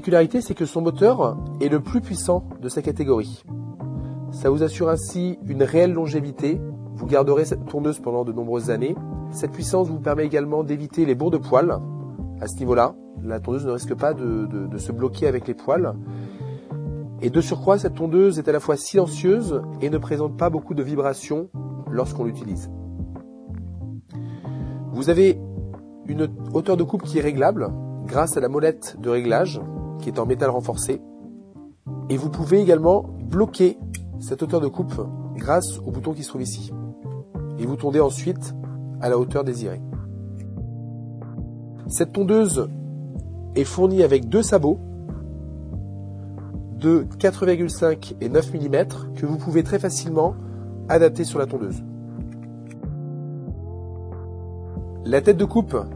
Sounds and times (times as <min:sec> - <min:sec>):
Speech: 0:00.0 - 0:03.4, 0:04.3 - 0:11.8, 0:12.4 - 0:16.0, 0:17.2 - 0:22.7, 0:25.0 - 0:25.4, 0:26.1 - 0:31.0, 0:32.1 - 0:36.8, 0:37.6 - 0:39.8, 0:41.9 - 0:42.7, 0:43.6 - 0:44.8, 0:46.8 - 0:51.8, 0:55.0 - 0:55.9
Music: 0:00.0 - 0:55.9.